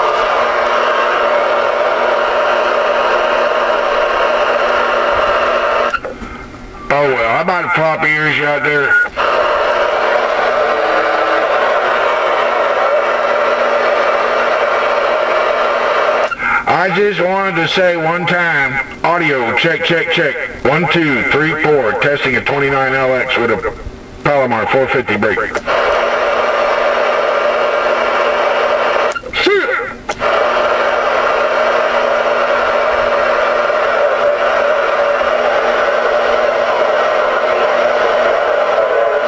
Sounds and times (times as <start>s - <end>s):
Radio: 0.0s - 39.2s.